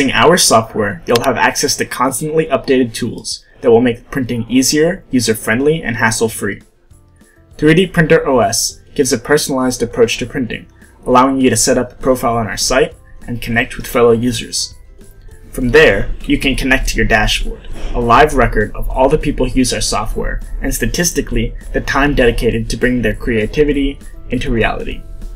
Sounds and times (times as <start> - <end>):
Speech: 0.0 - 6.7, 7.6 - 14.8, 15.5 - 25.0
Music: 0.0 - 25.3.